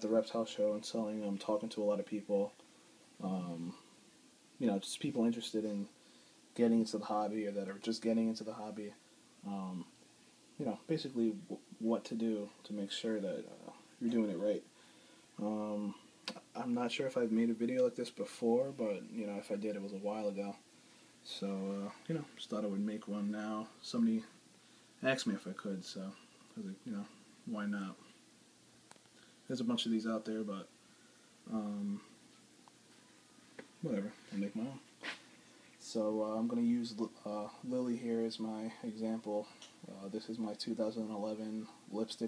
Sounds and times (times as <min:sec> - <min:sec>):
Speech: 0:00.0 - 0:02.6, 0:03.2 - 0:03.8, 0:04.6 - 0:06.0, 0:06.6 - 0:09.9, 0:10.6 - 0:14.7, 0:15.4 - 0:20.6, 0:21.2 - 0:24.4, 0:25.0 - 0:28.1, 0:29.5 - 0:30.7, 0:31.5 - 0:32.2, 0:33.8 - 0:34.9, 0:35.8 - 0:42.2
Inside, small room: 0:00.0 - 0:42.2.